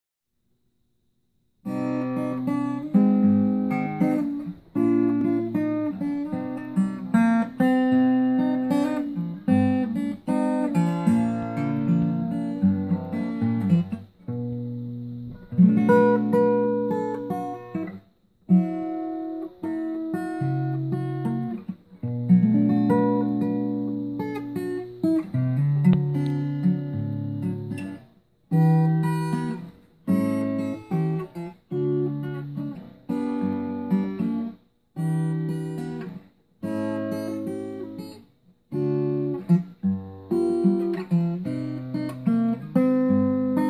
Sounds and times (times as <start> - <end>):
Inside, small room: 0.2 - 43.6
Acoustic guitar: 1.6 - 43.6.